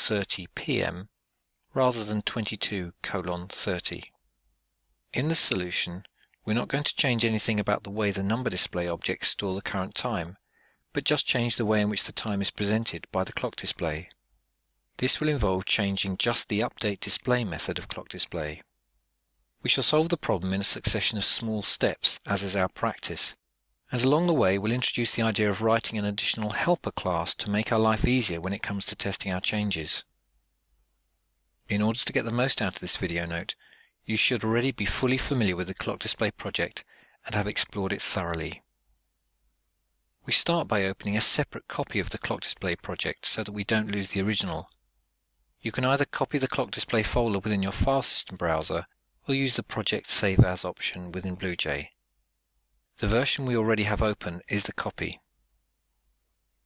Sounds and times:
Speech: 0.0s - 1.1s, 1.7s - 4.2s, 5.1s - 14.2s, 15.0s - 18.7s, 19.6s - 30.1s, 31.6s - 38.7s, 40.2s - 44.8s, 45.6s - 52.0s, 53.0s - 55.2s.

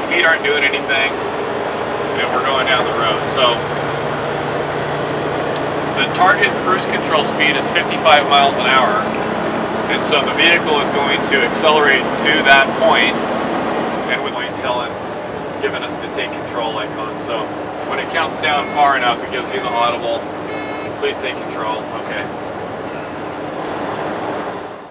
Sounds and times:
Speech: 0.0s - 1.2s, 2.2s - 3.6s, 6.0s - 9.1s, 9.9s - 13.2s, 14.1s - 15.0s, 15.6s - 20.2s, 21.0s - 22.3s
Truck: 0.0s - 24.9s.

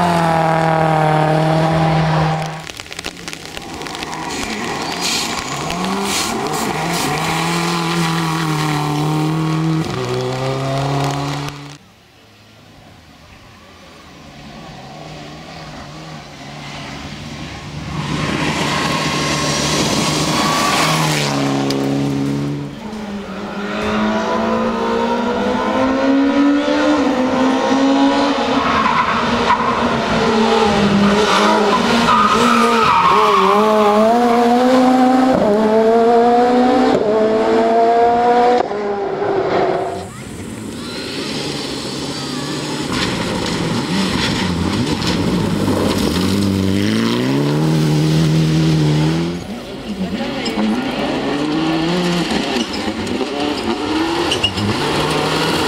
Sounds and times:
Skidding: 0.0s - 11.8s, 13.5s - 55.6s
Race car, auto racing: 0.0s - 55.6s.

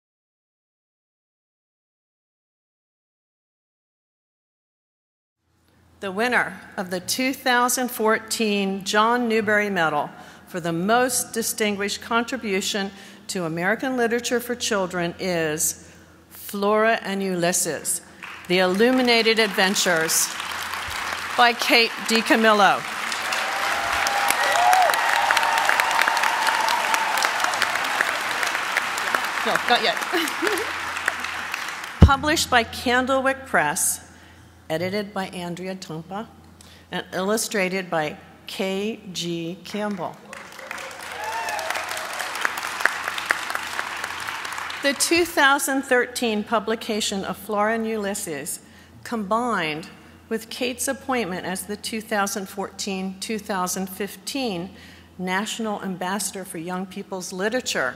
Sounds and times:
Narration, monologue: 5.6s - 20.4s, 32.0s - 40.3s, 44.8s - 57.9s
Female speech, woman speaking: 6.0s - 15.8s, 16.4s - 20.3s, 21.4s - 22.9s, 29.5s - 30.6s, 32.0s - 34.0s, 34.7s - 36.3s, 36.9s - 40.2s, 44.8s - 57.9s.

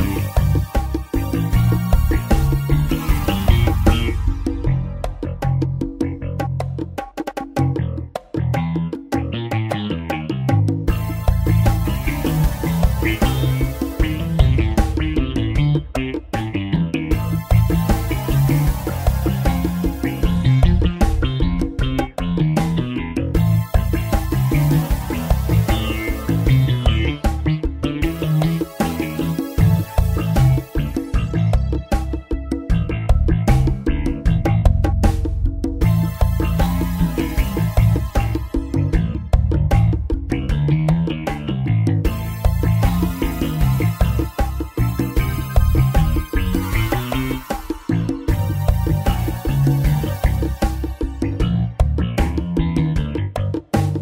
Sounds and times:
Music: 0.0s - 54.0s.

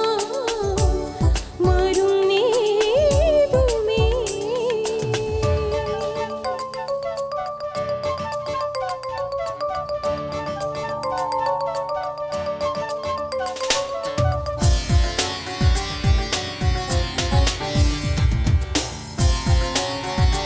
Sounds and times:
Music: 0.0s - 20.4s.

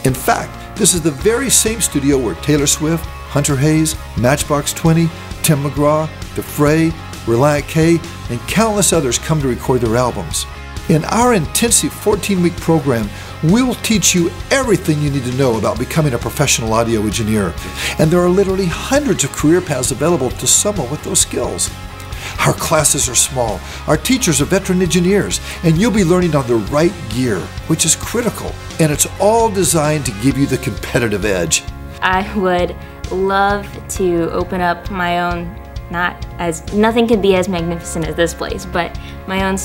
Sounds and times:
Speech: 0.0s - 21.6s, 22.4s - 39.6s
Music: 0.0s - 39.6s.

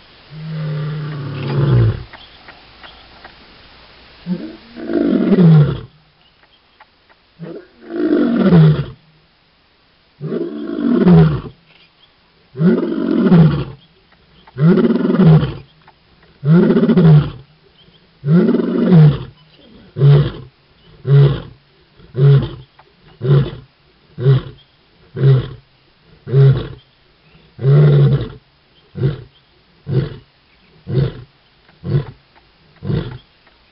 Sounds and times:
Outside, rural or natural: 0.0s - 33.7s.

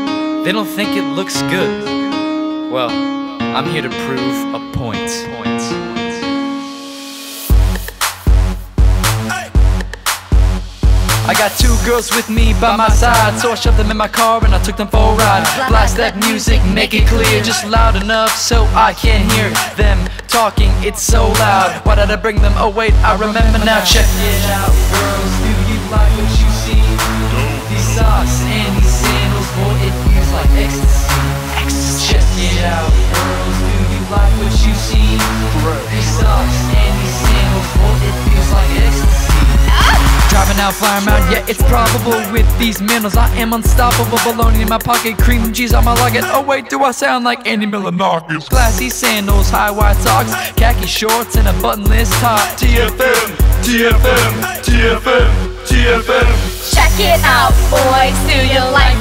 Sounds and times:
Music: 0.0s - 59.0s.

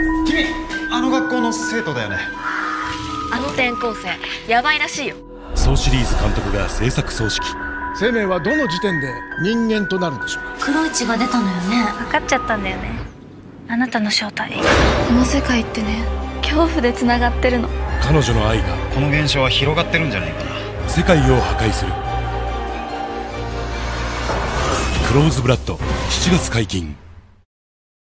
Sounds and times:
Music: 0.0s - 13.2s, 14.6s - 27.0s.

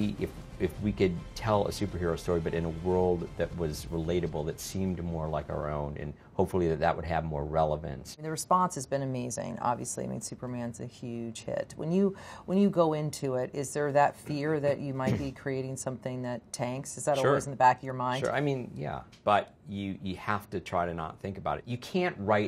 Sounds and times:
Music: 0.0s - 6.8s
Inside, small room: 0.0s - 22.4s
Speech: 0.0s - 22.4s.

